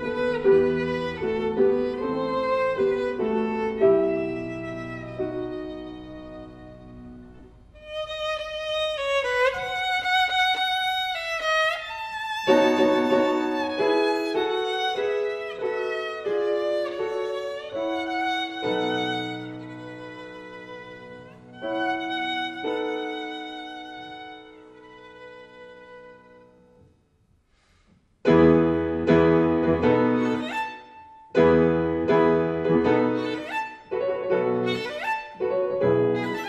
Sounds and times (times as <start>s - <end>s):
Violin, fiddle: 0.0s - 26.8s, 29.0s - 36.4s.